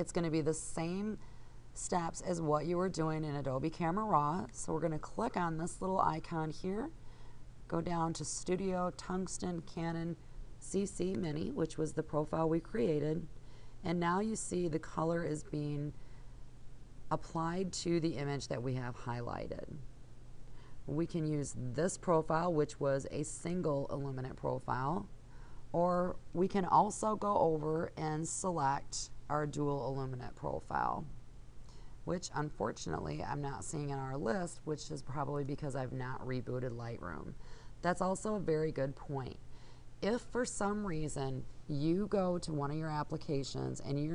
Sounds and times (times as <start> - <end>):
Speech: 0.0 - 1.2, 1.8 - 7.0, 7.7 - 16.0, 17.1 - 19.8, 20.9 - 25.1, 25.8 - 31.2, 32.1 - 39.4, 40.0 - 44.1.